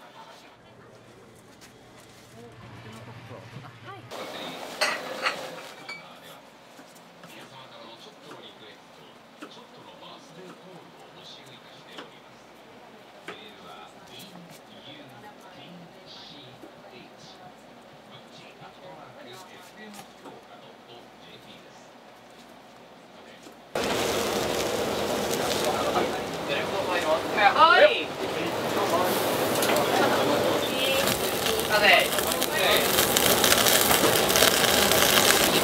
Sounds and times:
Speech: 0:00.0 - 0:01.4, 0:07.2 - 0:21.9, 0:25.4 - 0:33.0.

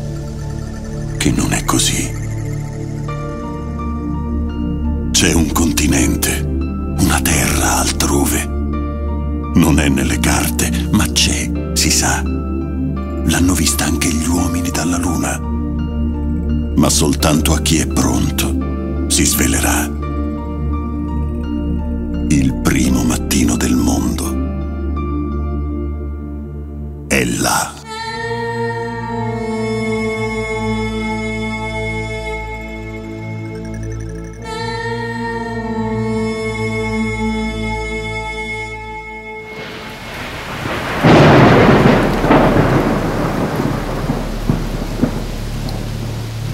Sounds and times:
Music: 0:00.0 - 0:46.5
Speech: 0:01.2 - 0:02.2, 0:05.2 - 0:08.5, 0:09.6 - 0:12.3, 0:13.2 - 0:15.4, 0:16.8 - 0:20.0, 0:22.3 - 0:24.4, 0:27.1 - 0:27.9.

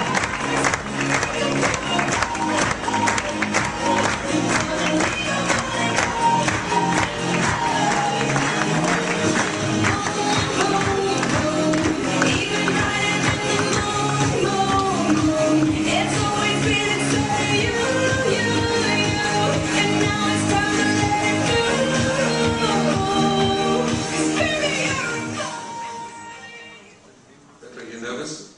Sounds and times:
Music: 0:00.0 - 0:27.0.

